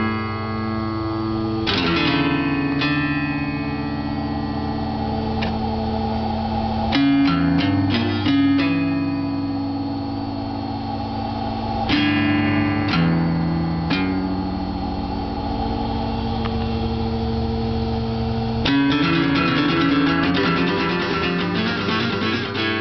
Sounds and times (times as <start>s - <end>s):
Strum: 0.0s - 22.8s
Acoustic guitar: 1.6s - 4.4s, 6.9s - 9.7s, 18.6s - 22.8s.